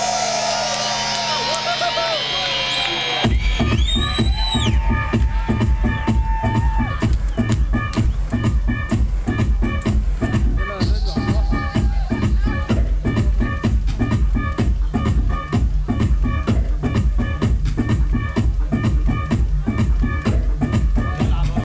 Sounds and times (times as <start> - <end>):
Music: 0.0 - 21.6.